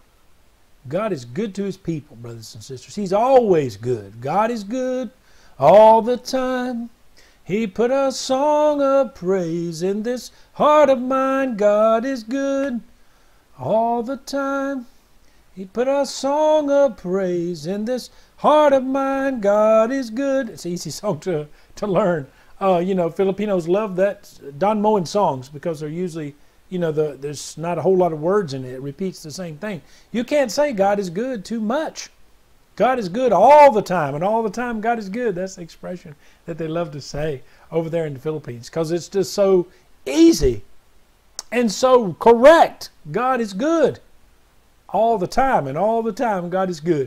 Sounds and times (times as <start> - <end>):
Speech: 0.8 - 6.9, 7.5 - 12.8, 13.6 - 14.9, 15.6 - 32.2, 32.8 - 40.7, 41.4 - 44.1, 44.9 - 47.0.